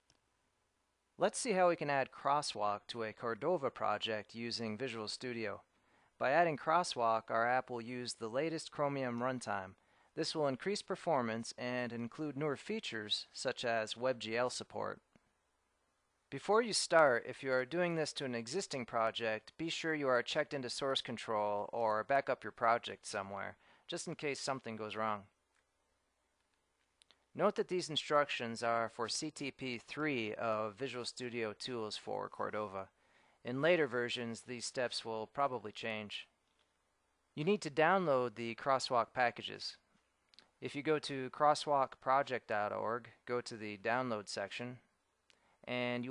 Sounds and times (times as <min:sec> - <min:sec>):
Speech: 0:01.2 - 0:15.0, 0:16.3 - 0:25.4, 0:27.4 - 0:36.4, 0:37.4 - 0:39.9, 0:40.6 - 0:44.9, 0:45.6 - 0:46.1.